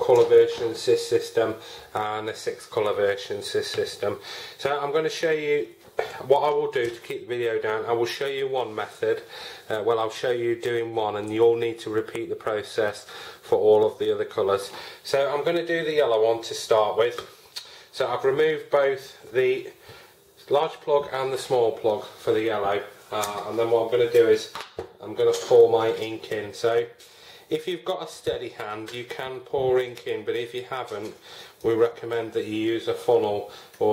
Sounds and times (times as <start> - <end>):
Speech: 0.0 - 19.8, 20.4 - 33.9.